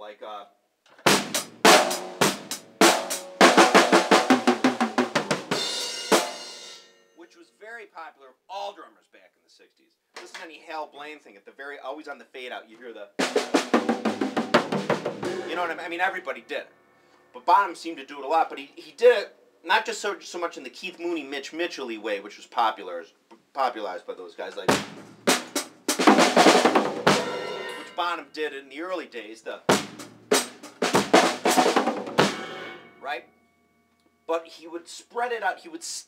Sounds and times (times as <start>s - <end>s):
Drum kit: 0.9s - 6.9s, 13.2s - 16.0s, 24.6s - 28.1s, 29.7s - 33.0s
Rimshot: 1.1s - 5.0s, 13.3s - 15.8s, 24.7s - 27.9s, 29.7s - 32.8s
Bass drum: 1.1s - 5.6s, 13.7s - 15.7s, 24.7s - 27.6s, 29.7s - 32.6s.